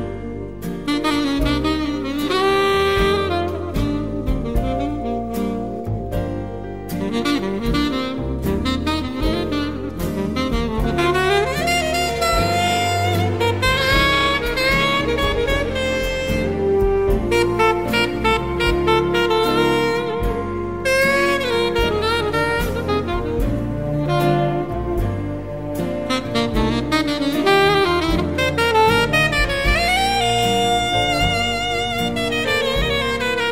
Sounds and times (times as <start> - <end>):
Brass instrument: 0.0 - 33.5
Saxophone: 0.0 - 33.5.